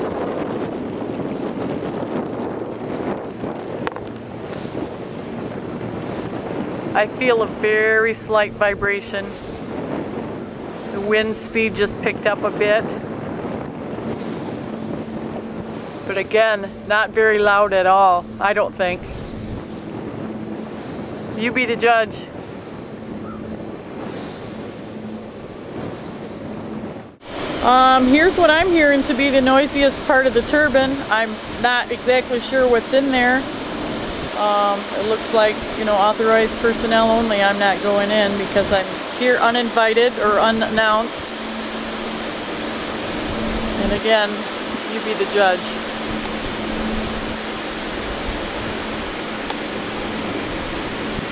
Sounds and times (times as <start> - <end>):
Wind: 0.0 - 51.3
Speech: 7.0 - 9.4, 11.0 - 13.0, 16.1 - 19.1, 21.4 - 22.3, 27.6 - 33.5, 34.4 - 41.3, 43.8 - 45.8.